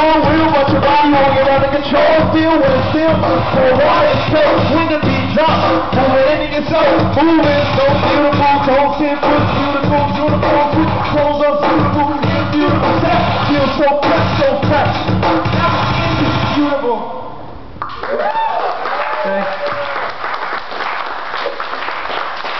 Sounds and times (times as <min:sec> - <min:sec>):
Music: 0:00.0 - 0:16.9.